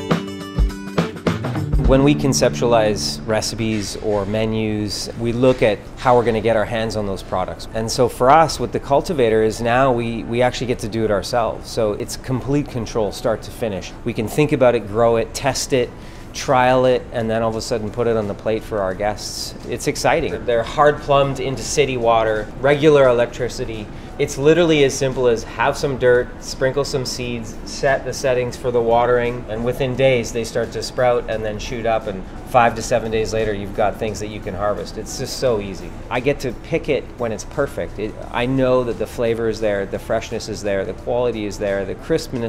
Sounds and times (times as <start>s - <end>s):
Music: 0.0s - 42.4s
Speech: 1.8s - 42.4s.